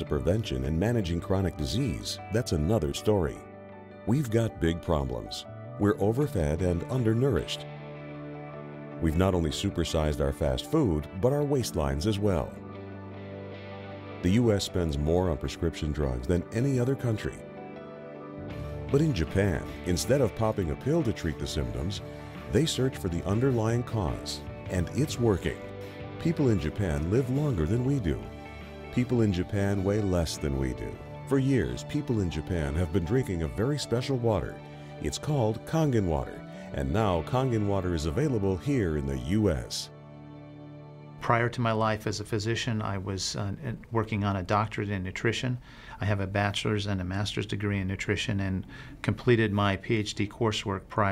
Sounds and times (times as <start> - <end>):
Speech: 0.0 - 3.5, 4.1 - 7.6, 9.0 - 12.6, 14.2 - 17.4, 18.9 - 28.3, 28.9 - 39.9, 41.2 - 51.1
Music: 0.0 - 51.1.